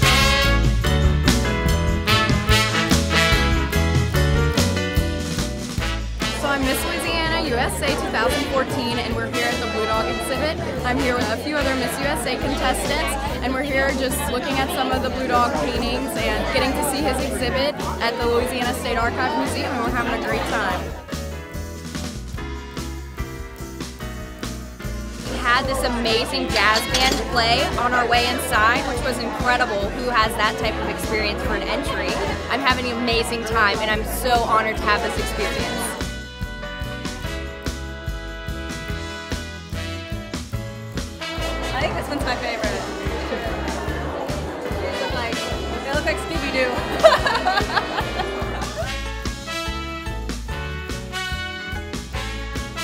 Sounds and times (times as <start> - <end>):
Music: 0.0 - 52.8
Speech: 6.4 - 21.0, 25.3 - 36.0, 41.6 - 47.0.